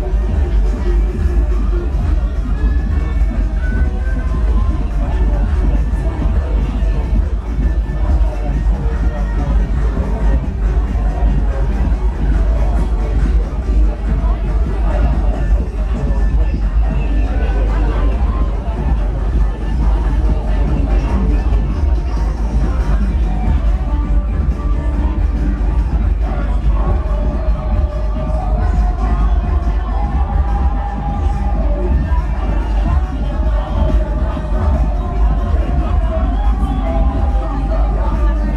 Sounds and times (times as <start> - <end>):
Music: 0.0 - 38.5.